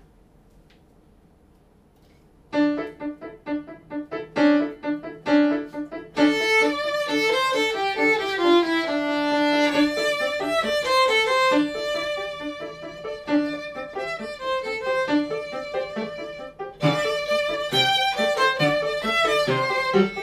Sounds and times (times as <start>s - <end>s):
Violin, fiddle: 6.2s - 20.2s.